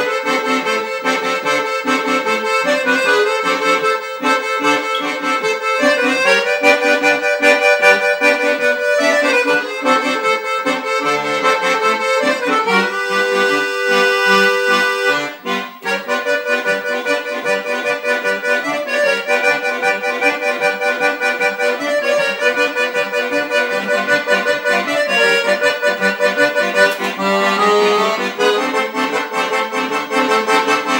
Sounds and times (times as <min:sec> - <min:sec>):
Accordion: 0:00.0 - 0:30.9.